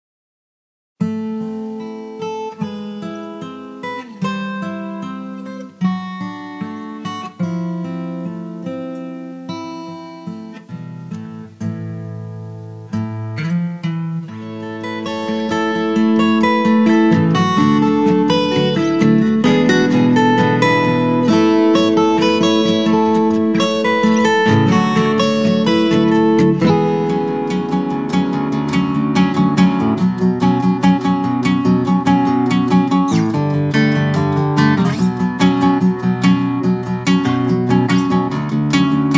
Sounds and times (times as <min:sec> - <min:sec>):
Acoustic guitar: 0:01.0 - 0:39.1.